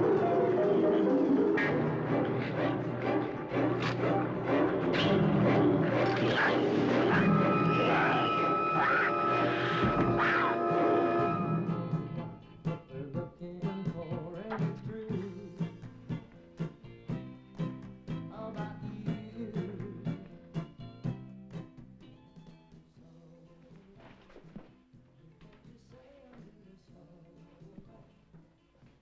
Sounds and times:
Music: 0.0 - 29.0.

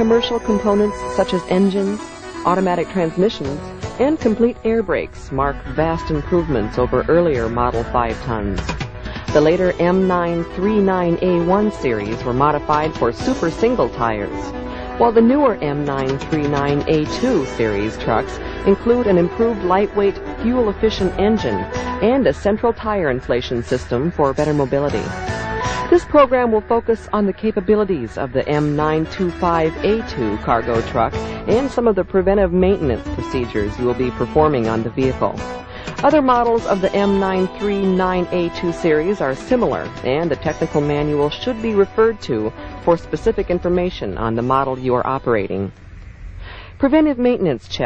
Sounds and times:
Speech: 0.0 - 8.7, 9.3 - 25.2, 25.9 - 35.4, 36.0 - 45.7, 46.8 - 47.8
Music: 0.0 - 47.8.

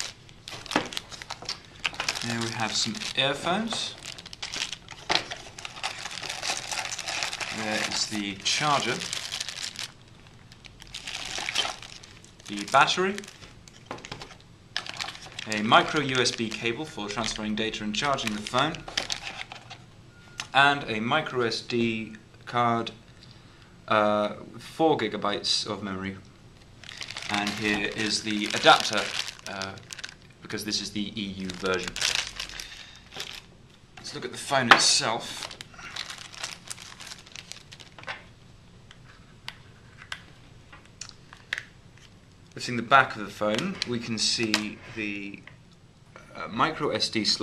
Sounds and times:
Speech: 2.2 - 4.0, 7.5 - 9.1, 12.5 - 13.3, 15.4 - 18.9, 20.5 - 23.0, 23.9 - 26.3, 27.3 - 29.8, 30.4 - 32.0, 34.0 - 35.6, 42.6 - 45.5, 46.2 - 47.4.

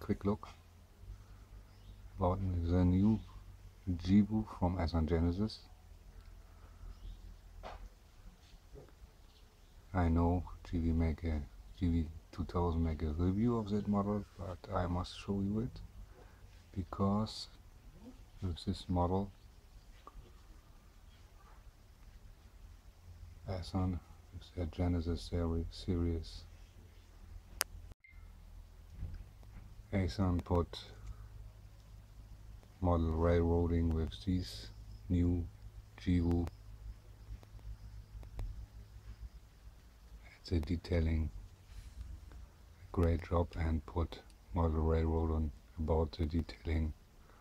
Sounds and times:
Speech: 0.0 - 0.6, 2.2 - 5.8, 9.9 - 15.9, 16.7 - 19.4, 23.4 - 26.6, 29.9 - 31.0, 32.8 - 36.5, 40.2 - 41.4, 42.9 - 47.0.

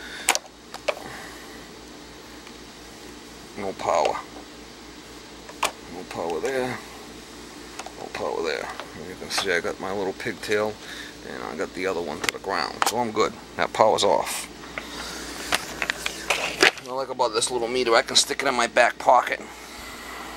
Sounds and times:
Speech: 3.6 - 4.3, 5.9 - 6.8, 8.0 - 14.5, 16.8 - 19.4.

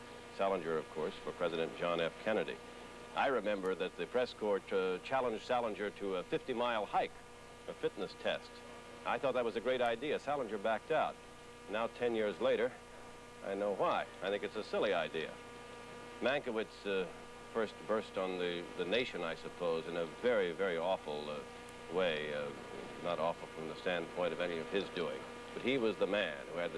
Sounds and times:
Speech: 0.4 - 2.6, 3.2 - 7.1, 7.7 - 12.8, 13.4 - 15.4, 16.2 - 26.7.

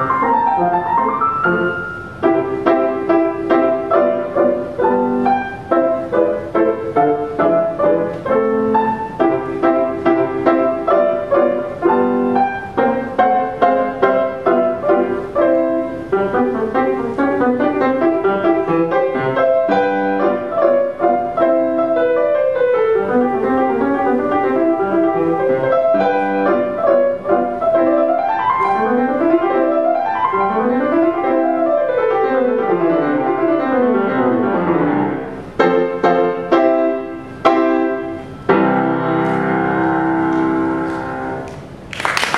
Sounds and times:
Classical music: 0.0 - 42.3
Piano: 0.0 - 42.3.

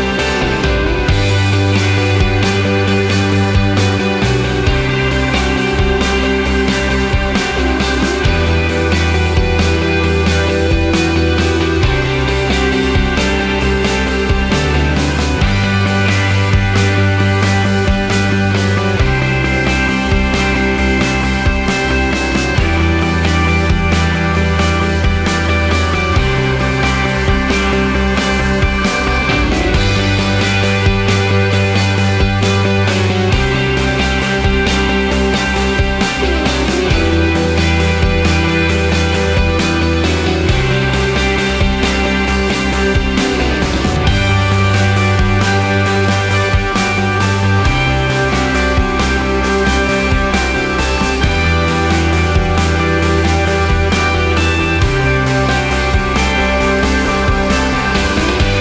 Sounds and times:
Music: 0.0 - 58.6.

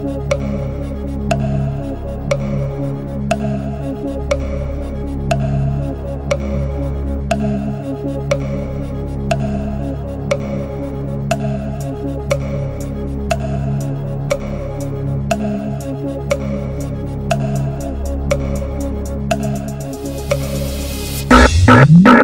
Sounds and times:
Tick-tock: 0.0 - 4.7, 5.3 - 22.2
Music: 0.0 - 22.2.

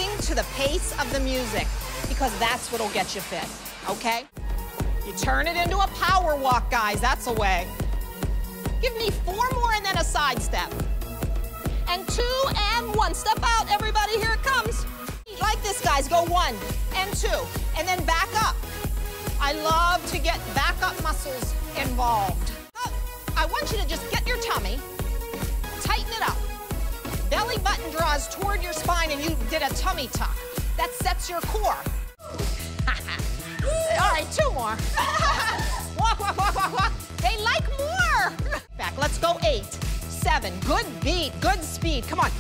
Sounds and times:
Music: 0.0 - 42.4.

